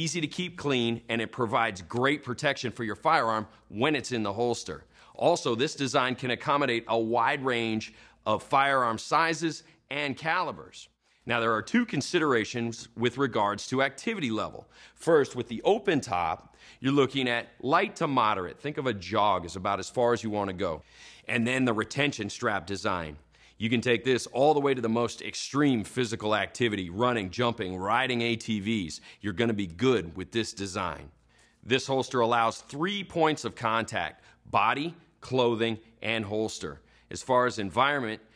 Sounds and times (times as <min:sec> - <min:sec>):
Speech: 0:00.0 - 0:38.3.